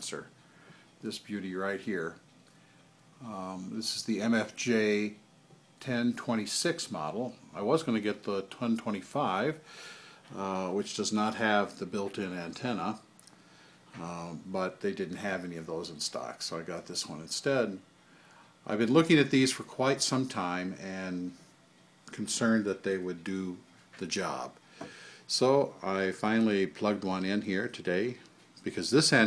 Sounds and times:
Speech: 0.0s - 0.3s, 1.0s - 2.2s, 3.2s - 5.2s, 5.8s - 9.6s, 10.3s - 13.1s, 14.0s - 17.8s, 18.6s - 21.4s, 22.1s - 24.6s, 25.3s - 29.2s.

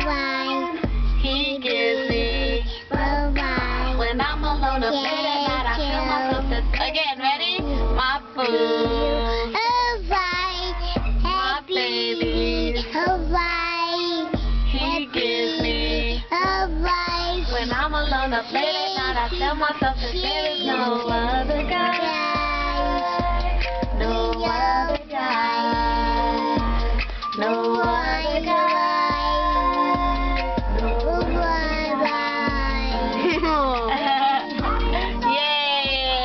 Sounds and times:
Child singing: 0.0s - 7.0s, 8.4s - 26.7s, 27.4s - 34.0s
Female singing: 0.0s - 26.8s, 27.4s - 36.2s
Music: 0.0s - 36.2s.

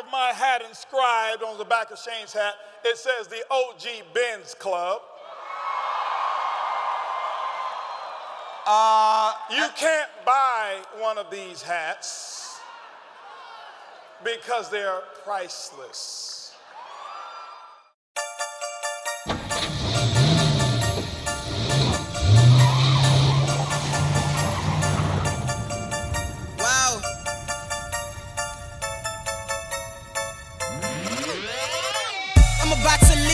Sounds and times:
Speech: 0.0s - 5.1s, 8.7s - 12.6s, 14.2s - 16.6s, 26.6s - 27.1s
Music: 18.2s - 33.3s.

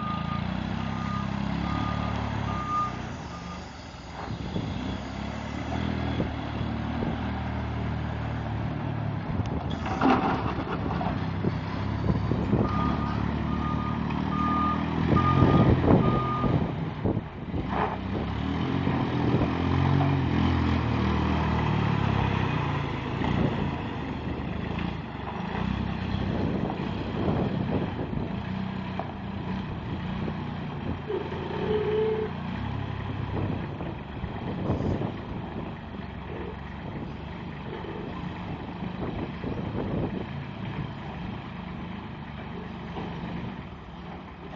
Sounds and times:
Outside, rural or natural: 0.0s - 44.5s
Truck: 0.0s - 44.5s.

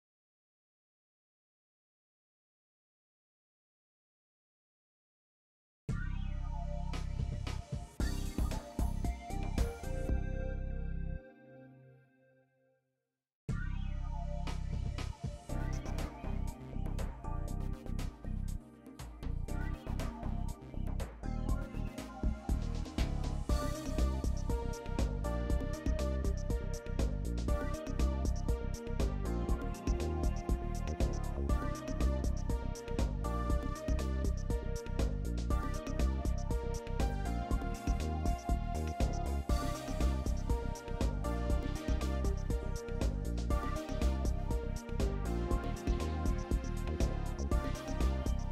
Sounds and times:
Music: 5.9s - 12.8s, 13.5s - 48.5s.

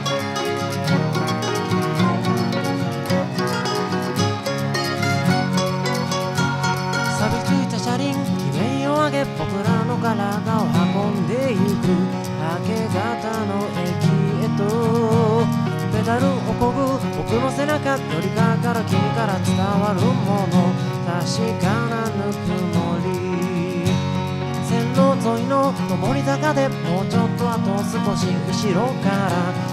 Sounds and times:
Music: 0.0s - 29.7s.

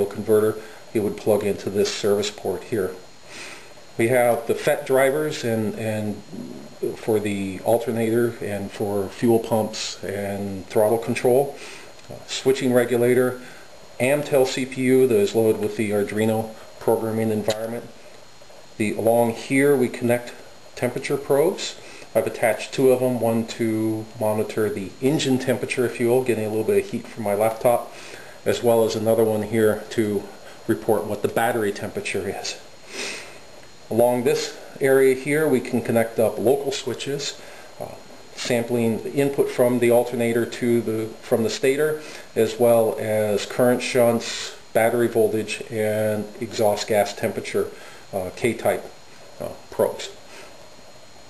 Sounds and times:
Speech: 0.0s - 3.1s, 4.0s - 18.0s, 18.8s - 32.7s, 33.9s - 50.2s.

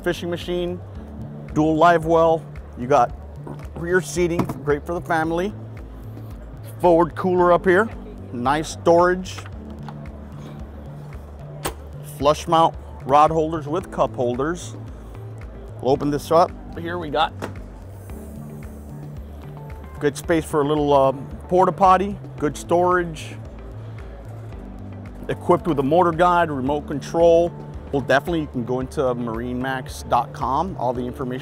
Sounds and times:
Speech: 0.0s - 0.8s, 1.6s - 3.1s, 3.8s - 5.6s, 6.8s - 9.4s, 12.1s - 14.8s, 15.8s - 17.4s, 20.0s - 23.4s, 25.3s - 31.4s
Music: 0.0s - 31.4s.

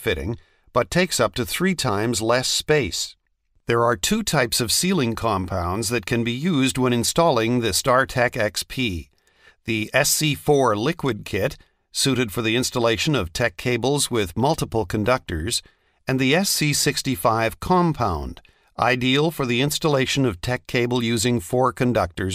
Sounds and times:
Speech: 0.0s - 9.1s, 9.7s - 22.3s.

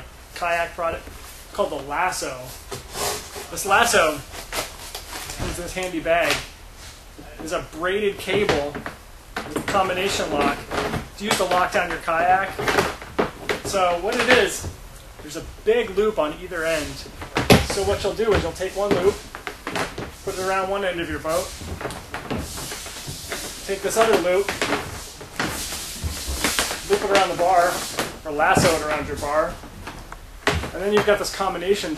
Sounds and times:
Speech: 0.0s - 2.5s, 3.5s - 4.2s, 5.4s - 6.5s, 7.2s - 8.8s, 9.5s - 12.7s, 13.6s - 19.2s, 20.3s - 21.5s, 23.6s - 24.6s, 26.9s - 29.6s, 30.7s - 31.9s.

